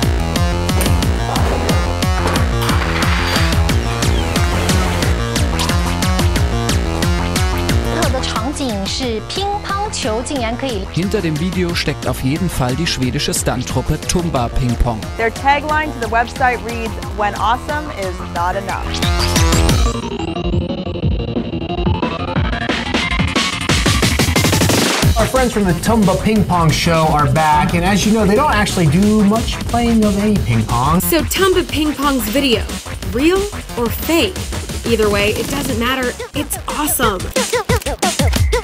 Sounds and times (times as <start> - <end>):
Music: 0.0 - 38.6
Speech: 7.9 - 19.0, 25.2 - 37.3.